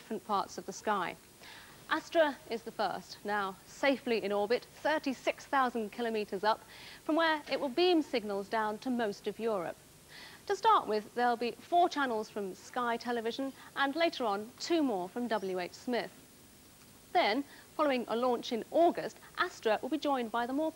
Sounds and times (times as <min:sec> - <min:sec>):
Speech: 0:00.0 - 0:01.2, 0:01.9 - 0:09.8, 0:10.5 - 0:16.2, 0:17.1 - 0:20.7.